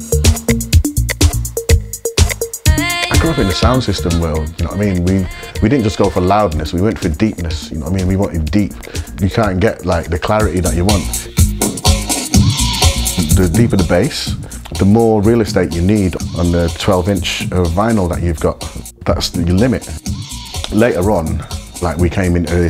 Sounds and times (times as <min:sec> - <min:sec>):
Electronic dance music: 0:00.0 - 0:06.6, 0:10.6 - 0:13.9
Electronica: 0:00.0 - 0:06.6
Trance music: 0:00.0 - 0:06.9
House music: 0:00.0 - 0:22.6
Speech: 0:03.1 - 0:11.2, 0:13.2 - 0:20.0, 0:20.7 - 0:22.6.